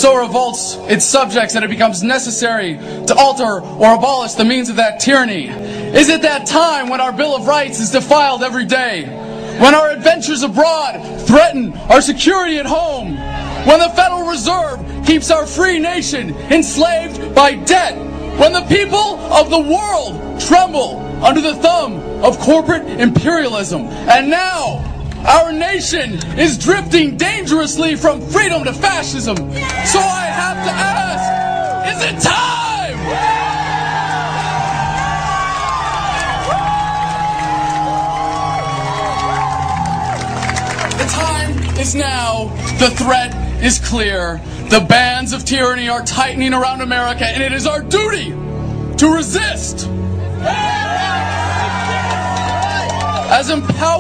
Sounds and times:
Male speech, man speaking: 0:00.0 - 0:33.0, 0:41.0 - 0:48.4, 0:49.0 - 0:49.9, 0:53.3 - 0:54.0
Music: 0:00.0 - 0:54.0.

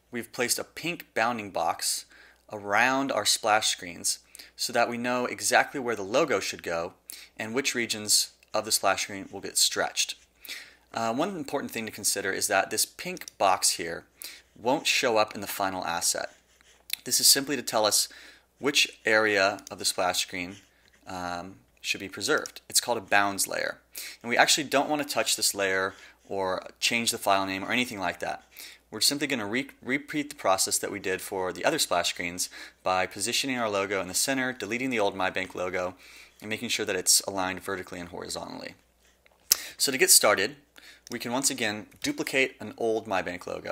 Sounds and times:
Speech: 0:00.0 - 0:10.3, 0:10.9 - 0:38.8, 0:39.7 - 0:43.7.

